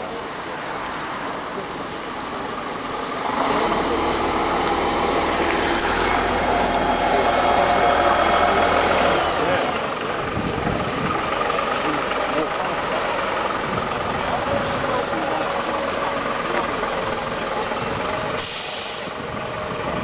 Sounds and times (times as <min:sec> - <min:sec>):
Bus: 0:00.0 - 0:20.0.